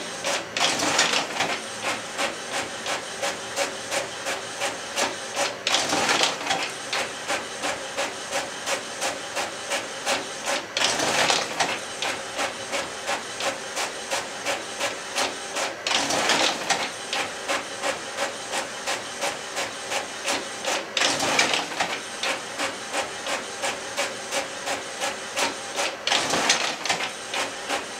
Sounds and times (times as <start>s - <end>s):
Printer: 0.0s - 27.9s.